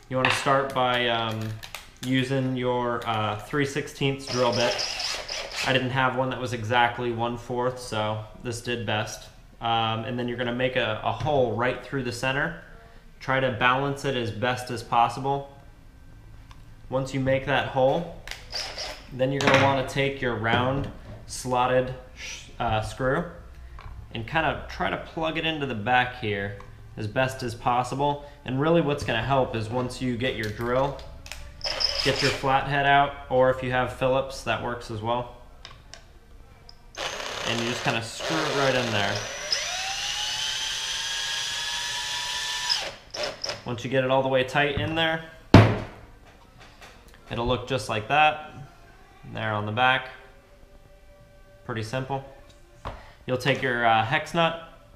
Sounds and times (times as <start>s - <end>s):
Drill: 4.3s - 5.8s, 18.5s - 19.1s, 31.6s - 32.4s, 37.0s - 43.6s.